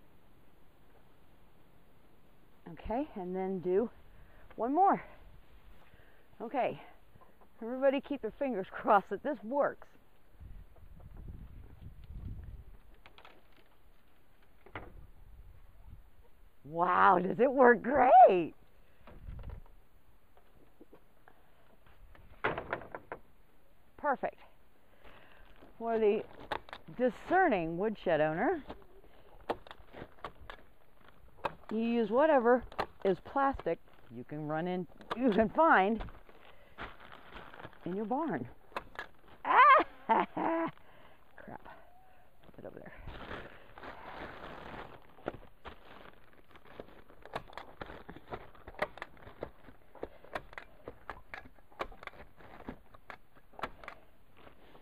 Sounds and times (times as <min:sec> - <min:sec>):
Speech: 0:02.7 - 0:04.0, 0:04.6 - 0:05.1, 0:06.4 - 0:06.9, 0:07.6 - 0:09.9, 0:16.7 - 0:18.6, 0:24.0 - 0:24.5, 0:25.8 - 0:26.3, 0:26.9 - 0:28.7, 0:31.7 - 0:36.0, 0:37.8 - 0:38.5, 0:42.5 - 0:43.0.